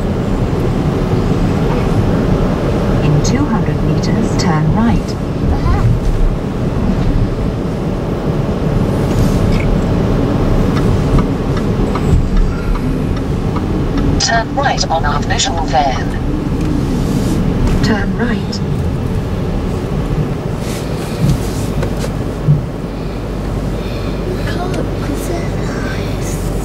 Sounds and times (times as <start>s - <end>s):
Car: 0.0s - 26.6s
Speech: 14.2s - 16.2s, 24.3s - 26.5s.